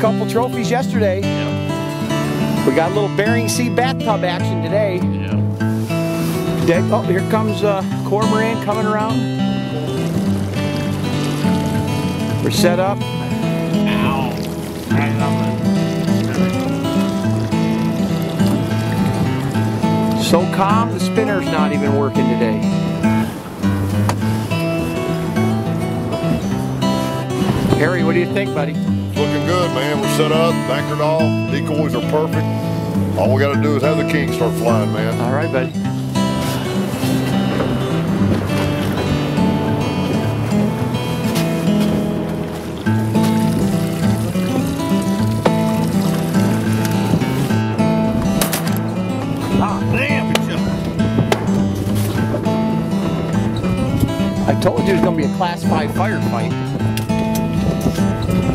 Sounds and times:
Speech: 0.0s - 1.3s, 2.7s - 5.4s, 6.6s - 9.2s, 12.4s - 13.0s, 20.2s - 22.6s, 27.8s - 32.4s, 33.2s - 35.7s, 54.5s - 56.6s
Music: 0.0s - 58.5s.

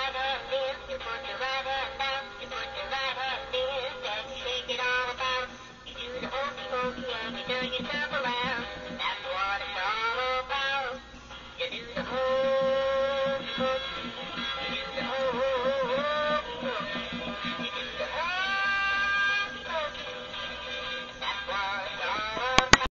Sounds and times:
Synthetic singing: 0.0s - 11.0s, 11.6s - 22.9s
Music: 0.0s - 22.9s.

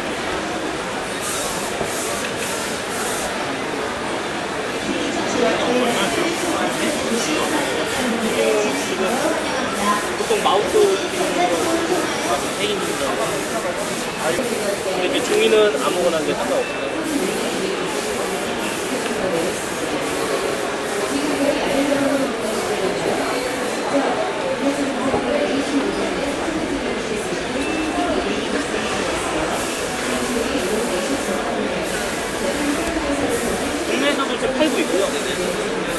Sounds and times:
Speech: 3.0s - 35.9s.

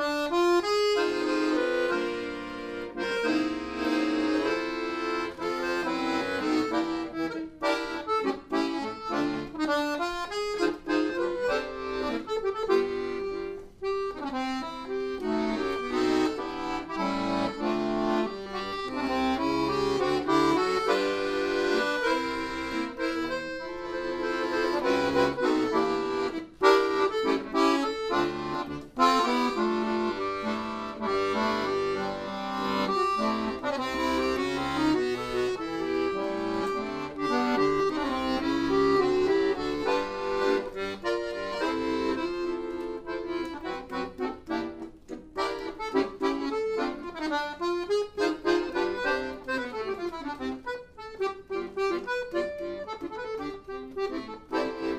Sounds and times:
Accordion: 0.0s - 54.9s.

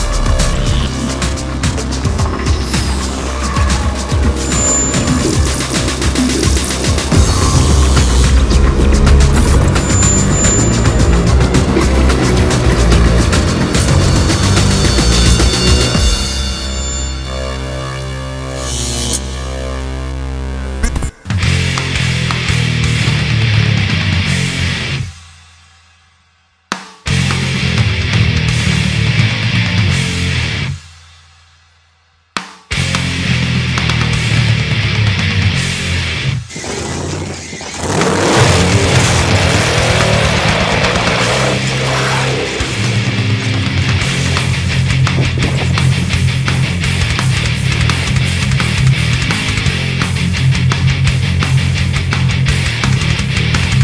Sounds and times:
Music: 0.0s - 53.8s.

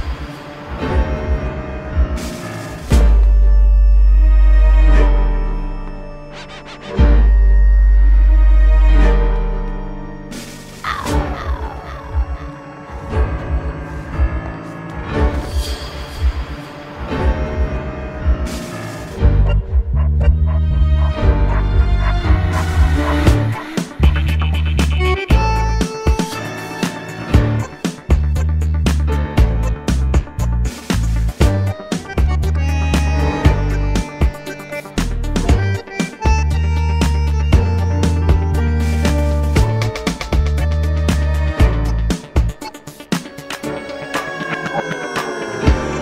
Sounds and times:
Background music: 0.0s - 46.0s.

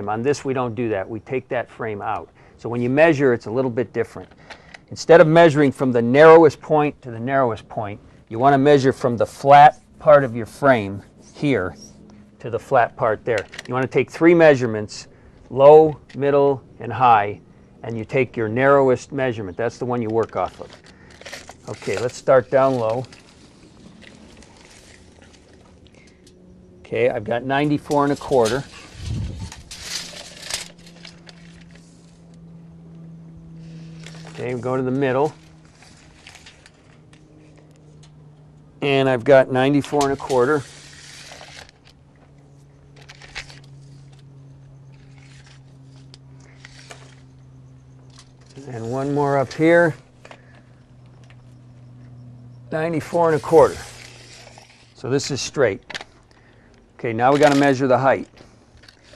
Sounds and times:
Speech: 0.0s - 4.3s, 4.9s - 11.8s, 12.4s - 20.8s, 21.7s - 23.1s, 26.9s - 28.7s, 34.4s - 35.4s, 38.8s - 40.7s, 48.6s - 50.0s, 52.7s - 53.9s, 55.0s - 55.8s, 57.0s - 58.3s.

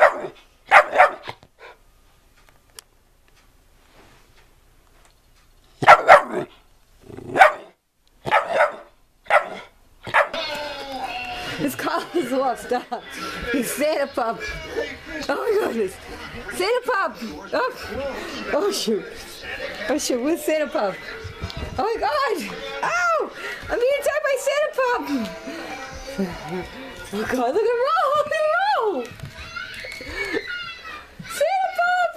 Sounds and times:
Dog: 0.0s - 1.8s, 5.8s - 6.6s, 7.3s - 10.4s
Inside, small room: 0.0s - 32.1s.

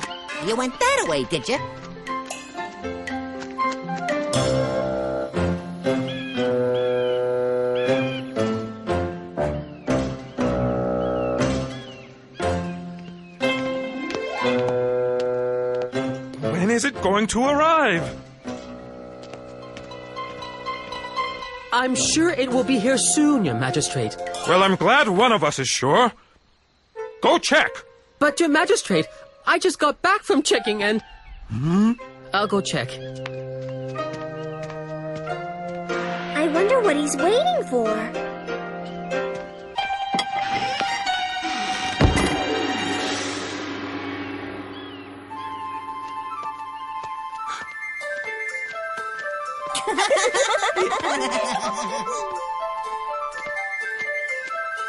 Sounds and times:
Chirp, tweet: 6.0s - 8.4s, 9.6s - 13.5s, 30.9s - 34.8s.

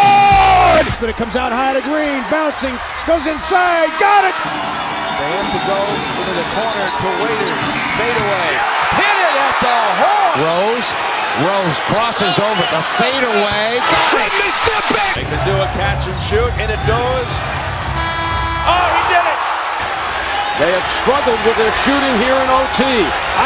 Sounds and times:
Speech: 0.3s - 4.4s, 5.2s - 17.4s, 20.6s - 23.4s.

